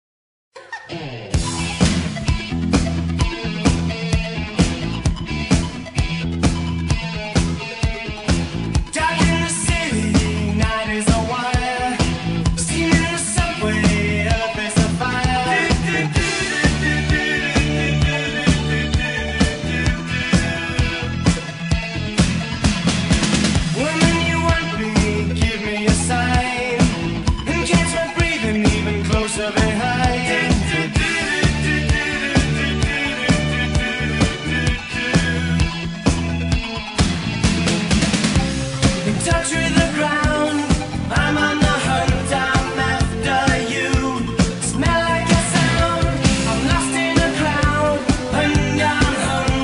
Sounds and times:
Music: 0.6 - 49.6.

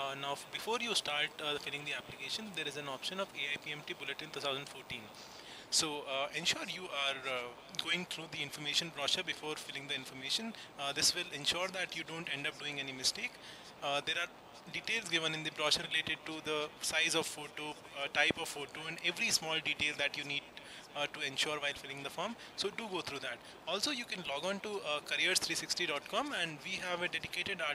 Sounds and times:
Speech: 0.0 - 5.1, 5.7 - 27.7.

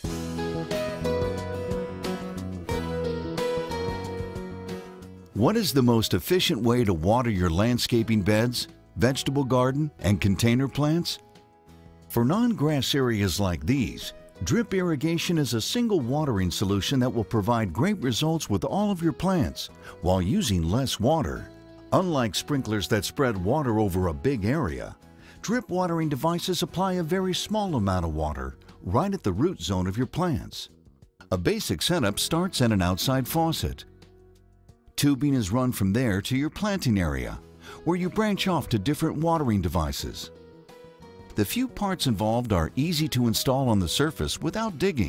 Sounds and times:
Music: 0.0 - 45.0
Speech: 5.4 - 11.2, 12.1 - 33.9, 35.0 - 40.3, 41.4 - 45.0.

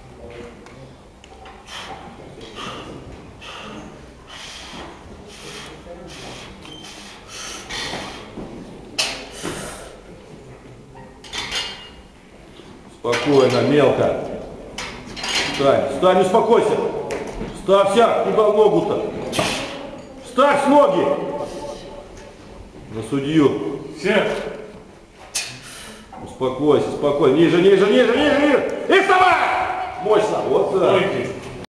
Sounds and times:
Speech: 26.2 - 31.6.

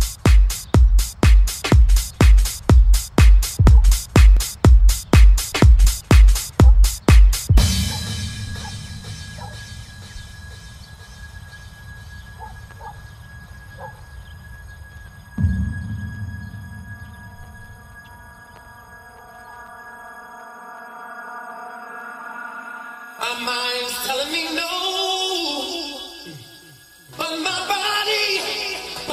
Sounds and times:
Music: 0.0 - 29.1.

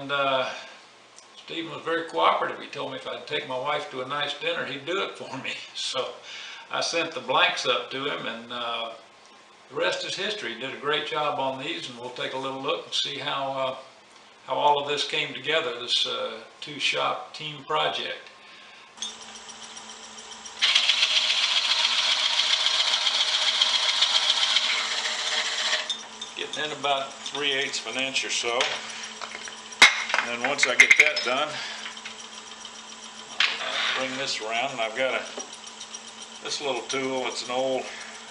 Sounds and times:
Speech: 0.0 - 0.6, 1.4 - 9.0, 9.7 - 13.9, 14.5 - 18.3, 26.4 - 28.8, 30.2 - 31.6, 33.6 - 35.4, 36.4 - 38.0.

